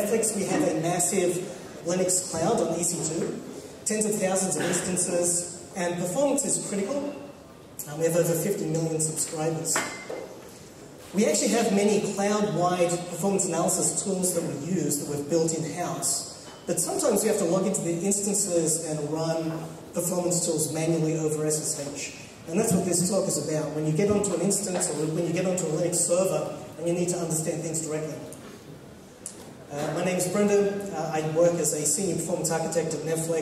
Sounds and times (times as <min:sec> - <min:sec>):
Speech: 0:00.0 - 0:10.0, 0:11.1 - 0:28.4, 0:29.3 - 0:33.4.